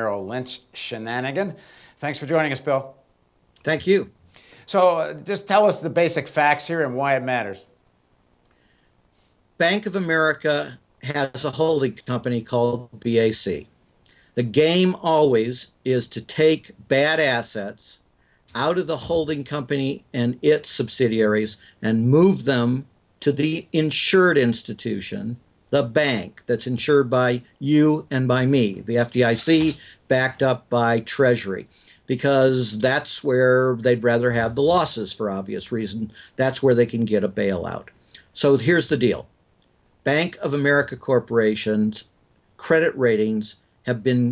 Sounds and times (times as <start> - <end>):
Speech: 0.0 - 3.0, 3.6 - 7.7, 9.6 - 13.7, 14.4 - 39.3, 40.0 - 44.3.